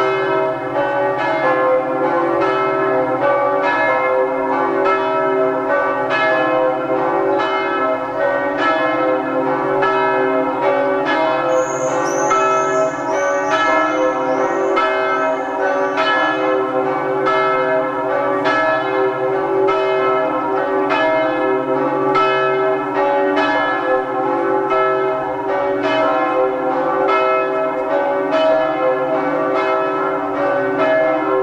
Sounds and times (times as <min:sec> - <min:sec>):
Church bell: 0:00.0 - 0:31.4.